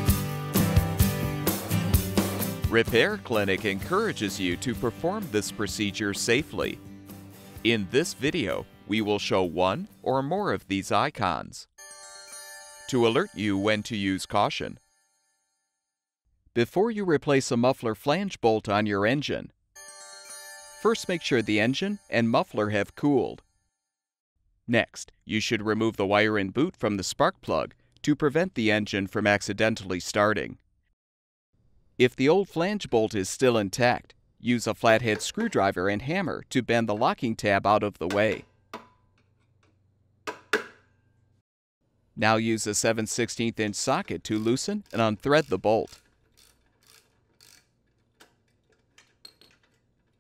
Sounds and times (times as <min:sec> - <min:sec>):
Chime: 0:11.8 - 0:15.5, 0:19.8 - 0:22.9.